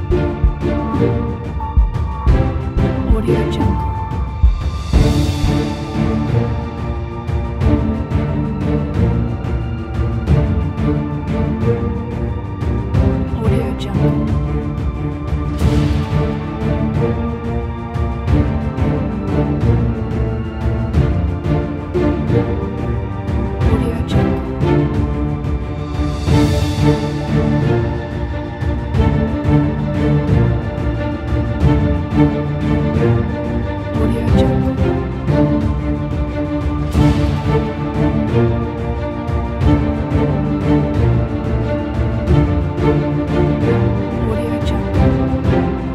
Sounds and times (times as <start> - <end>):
Background music: 0.0 - 45.9
Speech: 3.0 - 3.9, 13.3 - 14.3, 23.7 - 24.4, 34.0 - 34.8, 44.2 - 45.0.